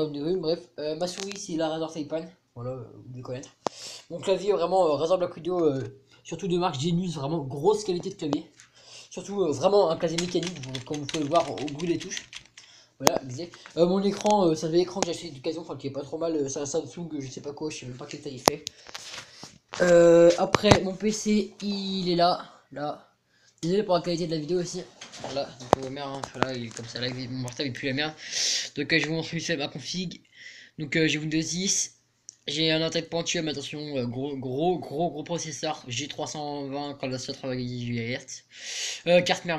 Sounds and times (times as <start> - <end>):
Speech: 0.0 - 12.4, 13.0 - 18.7, 19.8 - 39.5.